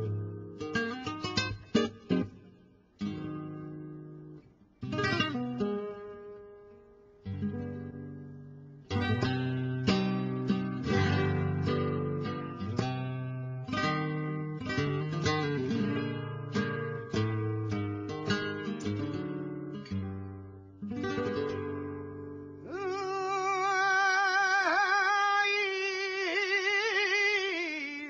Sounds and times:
Guitar: 0.0s - 28.0s.

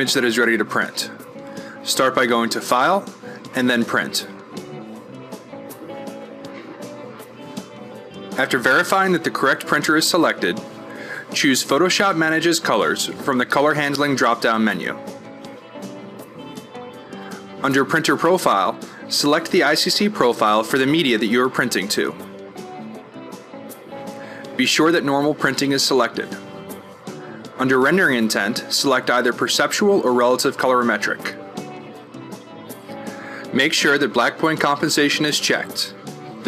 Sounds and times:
Speech: 0.0s - 1.2s, 1.8s - 4.4s, 8.4s - 10.6s, 11.3s - 15.0s, 17.6s - 22.2s, 24.6s - 26.5s, 27.6s - 31.4s, 33.5s - 36.4s
Music: 0.0s - 36.4s.

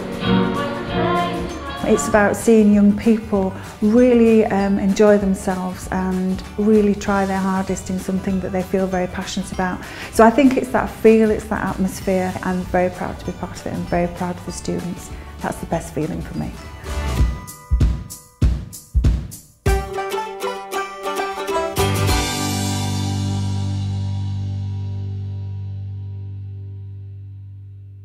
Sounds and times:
Banjo: 0.0s - 17.4s, 19.7s - 24.3s
Speech: 1.8s - 16.6s.

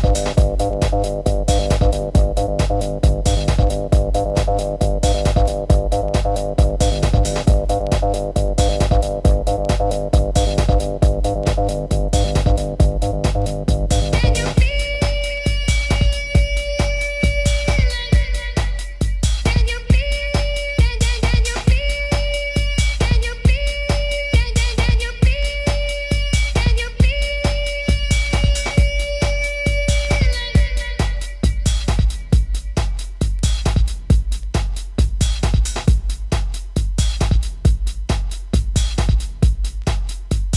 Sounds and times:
House music: 0.0s - 40.5s
Techno: 0.0s - 40.5s.

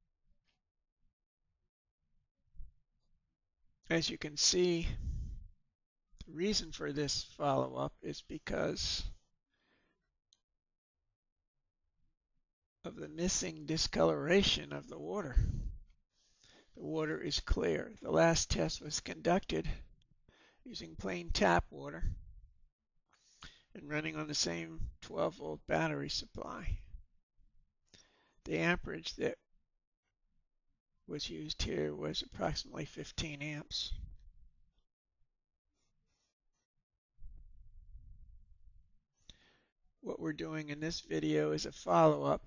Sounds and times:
Speech: 3.9s - 5.2s, 6.2s - 9.2s, 12.9s - 15.7s, 16.8s - 19.9s, 20.7s - 22.2s, 23.8s - 26.9s, 28.5s - 29.4s, 31.1s - 34.1s, 40.1s - 42.4s.

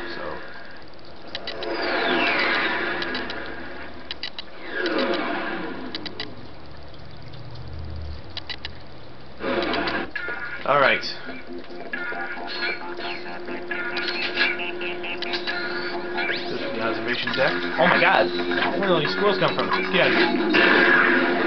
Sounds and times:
Music: 10.2s - 21.4s.

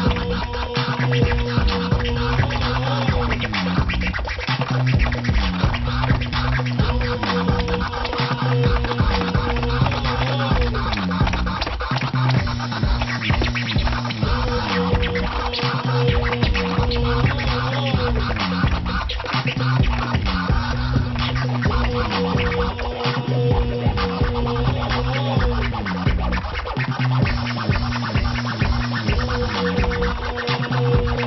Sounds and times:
Inside, large room or hall: 0.0s - 31.2s
Scratching (performance technique): 0.0s - 31.2s.

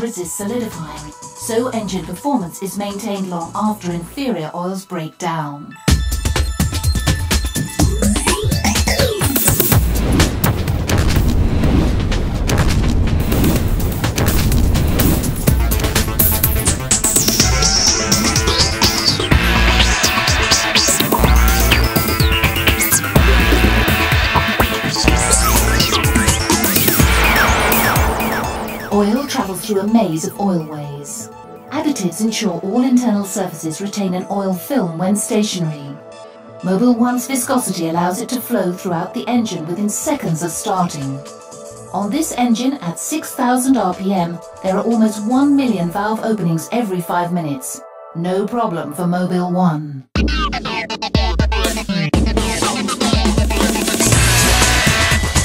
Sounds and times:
Speech: 0.0s - 5.8s, 28.9s - 36.0s, 36.6s - 41.3s, 41.9s - 50.1s
Music: 0.0s - 55.4s
Boom: 9.8s - 16.9s, 25.1s - 30.4s.

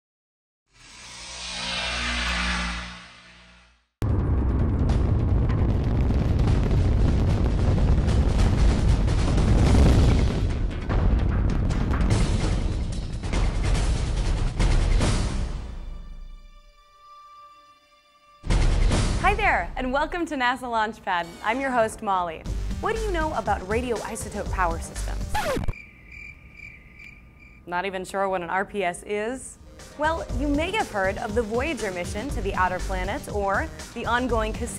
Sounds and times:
Music: 7.6s - 25.7s, 28.6s - 34.7s.

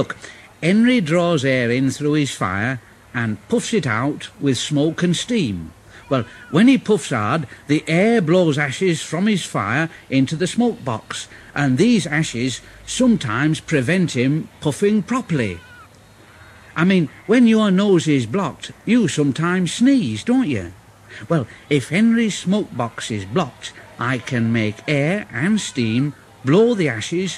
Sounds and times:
Speech: 0.0s - 15.7s, 16.7s - 27.3s.

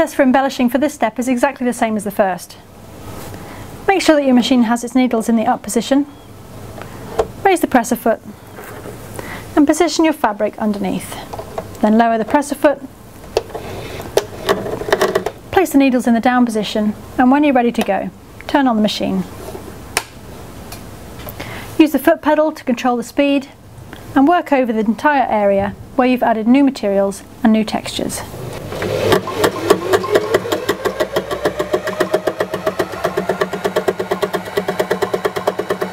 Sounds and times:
Speech: 0.0s - 2.6s, 3.9s - 6.1s, 7.4s - 8.2s, 9.6s - 12.9s, 15.6s - 19.3s, 21.8s - 23.6s, 24.2s - 28.3s.

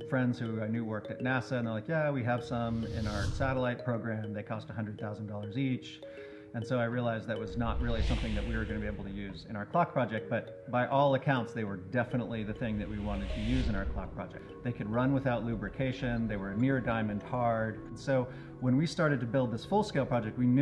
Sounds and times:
Music: 0.0s - 20.6s
Speech: 0.0s - 20.6s.

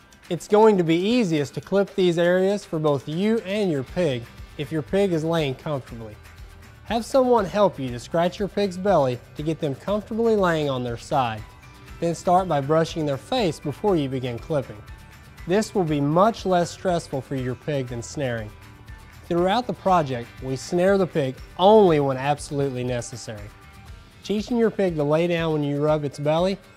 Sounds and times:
Music: 0.0s - 26.7s
Speech: 0.3s - 6.2s, 6.9s - 11.4s, 12.0s - 14.8s, 15.5s - 18.5s, 19.3s - 23.5s, 24.2s - 26.6s.

